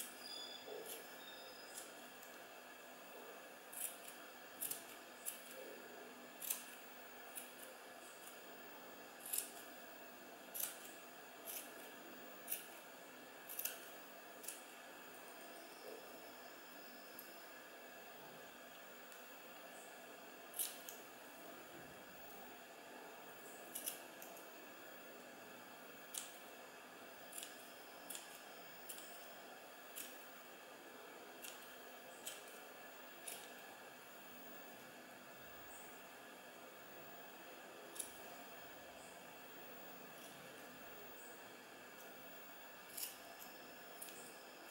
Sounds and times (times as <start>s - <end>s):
Inside, small room: 0.0s - 44.7s.